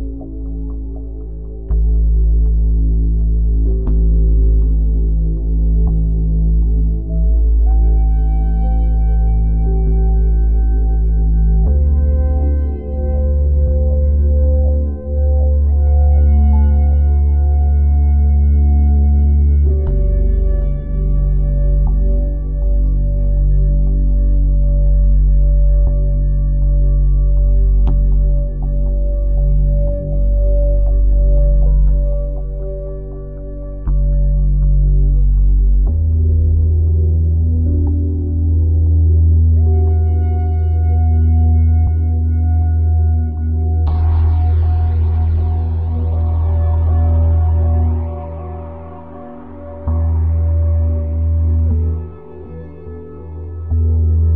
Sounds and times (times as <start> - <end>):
New-age music: 0.0 - 54.3.